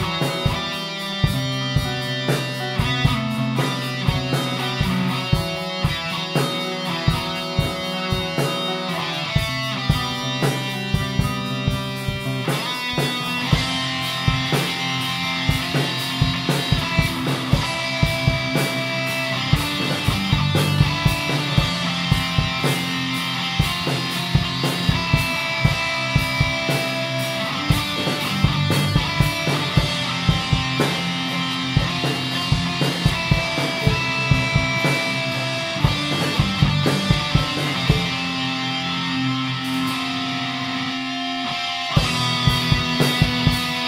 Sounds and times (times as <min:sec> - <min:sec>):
Music: 0:00.0 - 0:43.8.